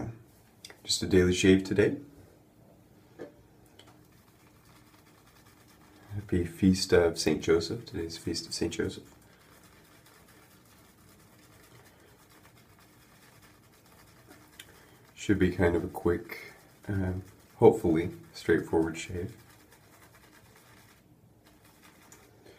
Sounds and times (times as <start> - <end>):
Speech: 0.8 - 2.1, 6.1 - 9.1, 15.2 - 19.4.